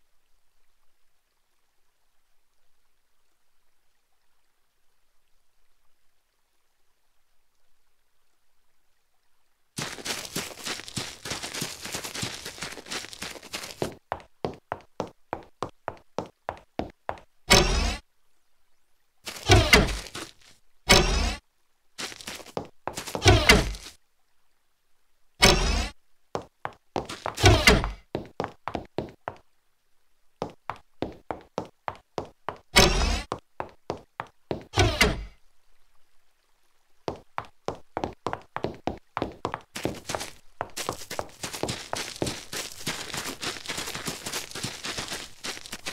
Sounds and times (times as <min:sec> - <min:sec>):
Outside, rural or natural: 0:00.0 - 0:45.9
Sound effect: 0:17.5 - 0:18.0, 0:20.9 - 0:21.4, 0:25.4 - 0:26.0.